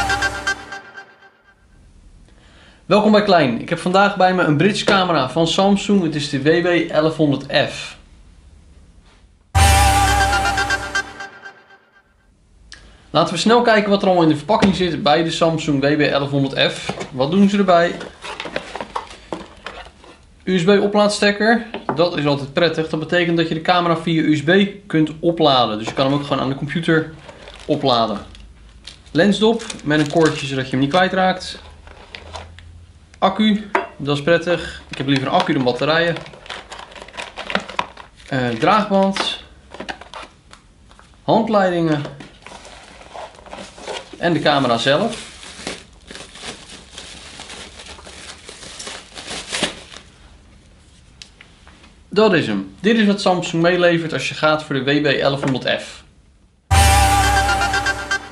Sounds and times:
Speech: 2.9 - 8.0, 13.1 - 18.1, 20.4 - 28.3, 29.1 - 31.7, 33.2 - 36.3, 38.3 - 39.5, 41.3 - 42.2, 44.2 - 45.2, 52.1 - 56.1.

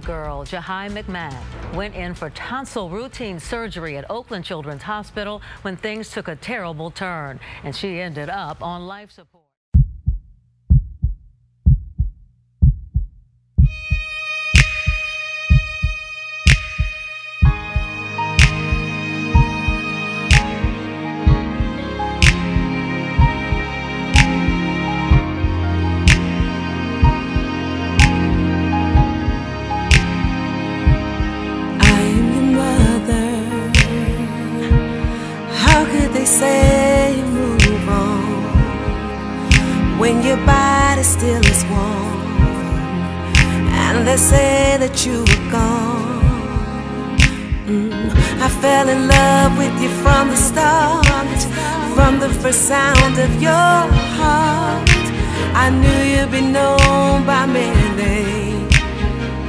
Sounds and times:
Speech: 0.0 - 9.5
Heart sounds, heartbeat: 9.8 - 14.1, 14.8 - 16.0
Music: 13.6 - 59.4.

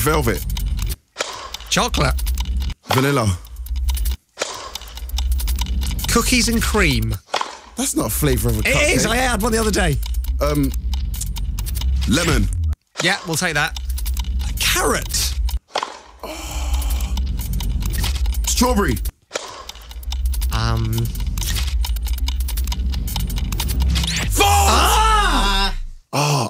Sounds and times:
Speech: 2.9 - 3.4, 6.1 - 7.2, 7.8 - 10.7, 12.1 - 13.8, 14.6 - 15.4, 18.5 - 19.0, 20.5 - 21.2, 24.3 - 26.5.

